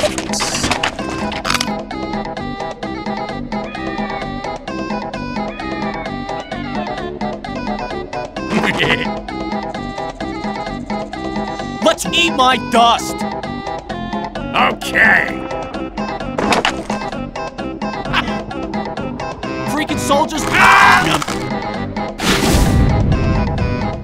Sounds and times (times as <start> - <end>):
Music: 0.0 - 24.0.